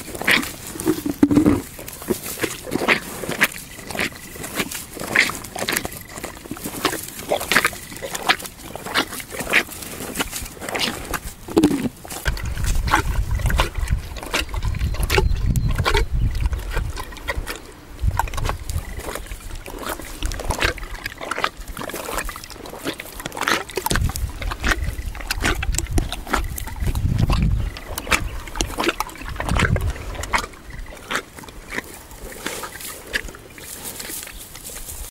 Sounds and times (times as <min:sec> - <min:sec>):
Animal: 0:00.0 - 0:35.1.